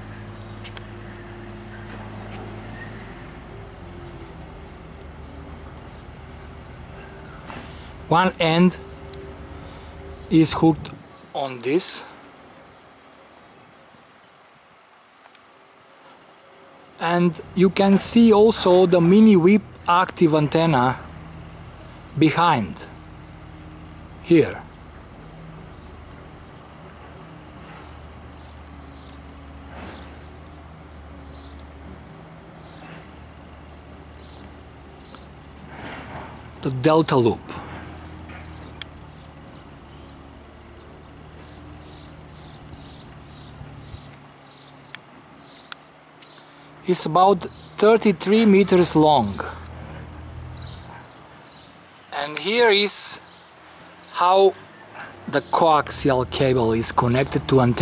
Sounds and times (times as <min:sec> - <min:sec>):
Speech: 0:08.1 - 0:08.8, 0:10.3 - 0:12.1, 0:17.0 - 0:21.0, 0:22.2 - 0:22.9, 0:24.2 - 0:24.7, 0:36.6 - 0:37.6, 0:46.8 - 0:49.6, 0:52.1 - 0:53.3, 0:54.2 - 0:54.6, 0:55.3 - 0:57.8.